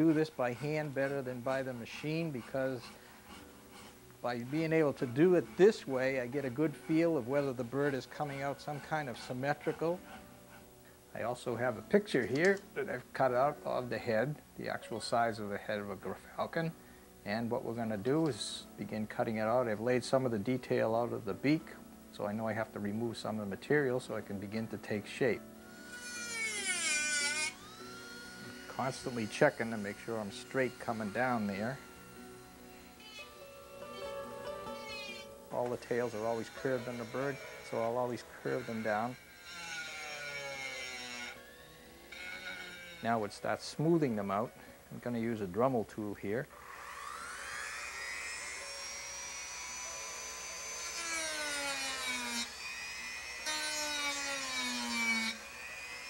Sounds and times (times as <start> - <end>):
Speech: 0.0 - 2.9, 4.3 - 10.0, 11.2 - 25.4, 28.7 - 31.8, 35.5 - 39.2, 43.0 - 46.5
Music: 0.0 - 56.1.